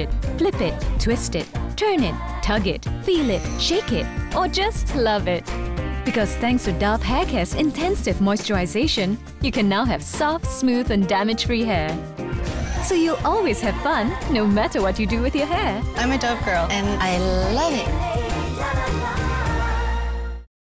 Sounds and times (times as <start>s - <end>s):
Music: 0.0s - 20.5s
Speech: 6.1s - 12.0s.